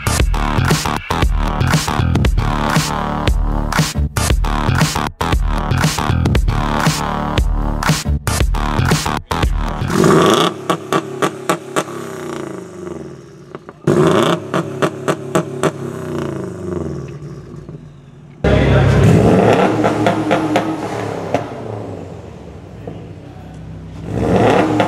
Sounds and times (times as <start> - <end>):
Outside, urban or manmade: 0.0 - 24.8
Car: 8.6 - 24.8.